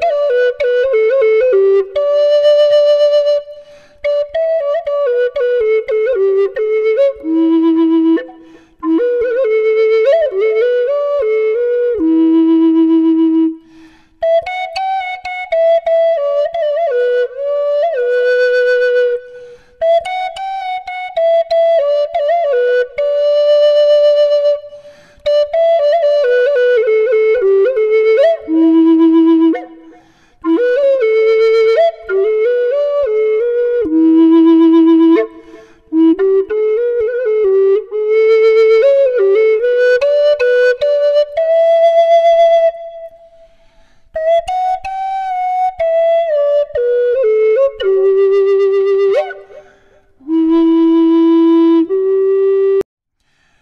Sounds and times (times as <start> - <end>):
Music: 0.0 - 52.9.